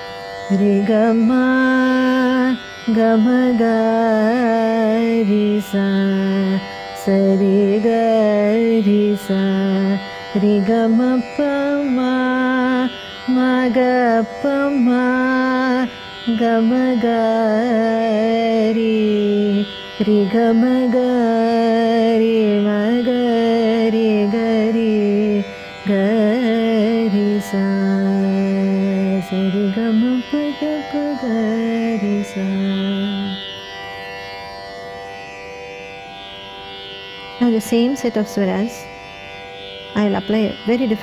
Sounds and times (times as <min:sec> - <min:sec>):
Carnatic music: 0:00.0 - 0:41.0
Singing: 0:00.5 - 0:33.4.